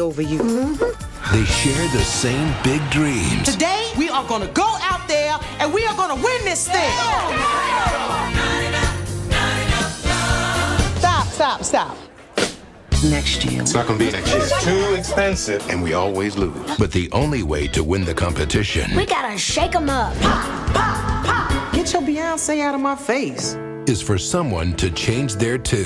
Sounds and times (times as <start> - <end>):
Music: 0.0 - 11.5, 12.4 - 25.8
Speech: 13.8 - 19.6.